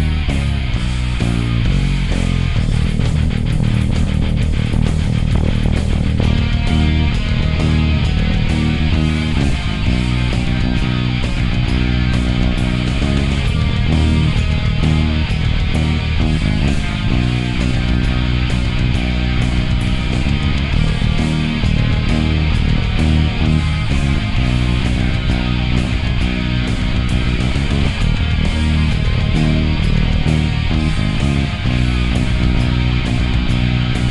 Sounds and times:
Bass guitar: 0:00.0 - 0:34.1
Electric guitar: 0:00.0 - 0:34.1.

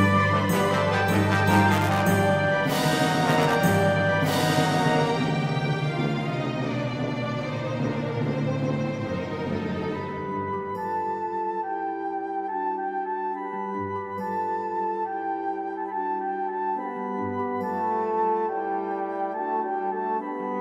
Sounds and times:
Music: 0:00.0 - 0:20.6.

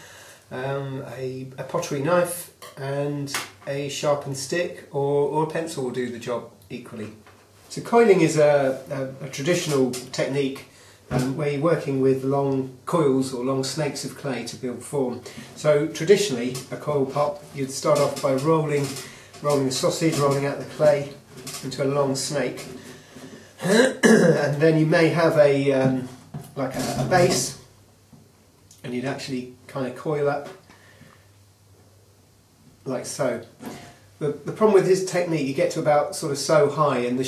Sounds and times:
Speech: 0:00.5 - 0:22.8, 0:23.6 - 0:27.7, 0:28.8 - 0:30.6, 0:32.8 - 0:37.2.

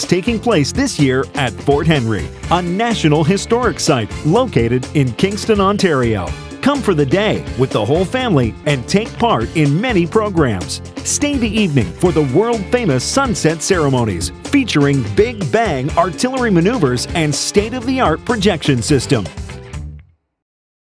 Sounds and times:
Speech: 0:00.0 - 0:19.4
Music: 0:00.0 - 0:20.4.

